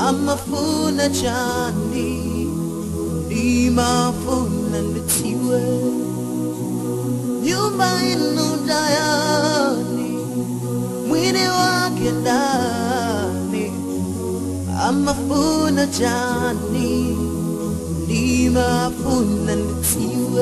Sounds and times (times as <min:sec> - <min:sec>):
Gospel music: 0:00.0 - 0:20.4
New-age music: 0:00.0 - 0:20.4.